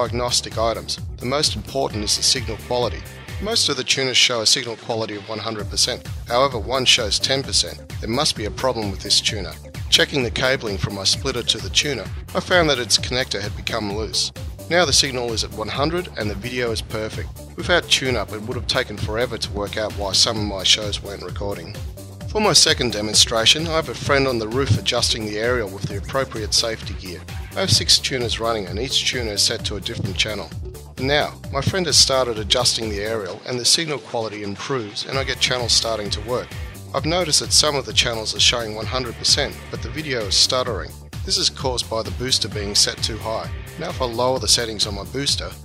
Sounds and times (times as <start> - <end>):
Music: 0.0 - 45.6
Speech: 0.0 - 45.6.